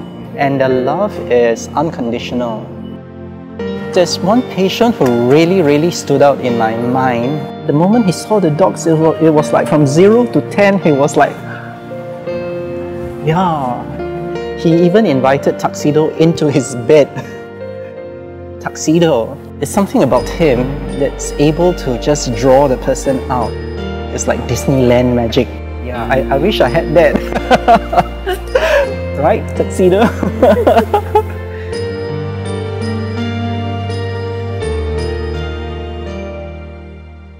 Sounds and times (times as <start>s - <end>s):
Music: 0.0s - 37.3s
Speech: 18.6s - 23.5s, 24.2s - 27.2s, 29.2s - 30.3s.